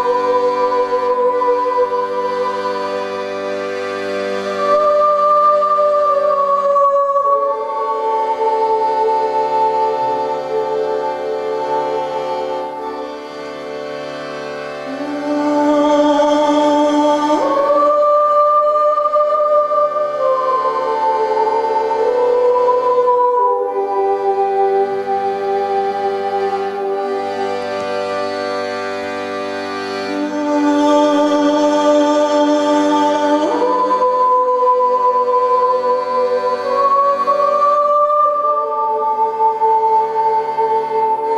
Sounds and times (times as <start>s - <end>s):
Music: 0.0s - 41.3s.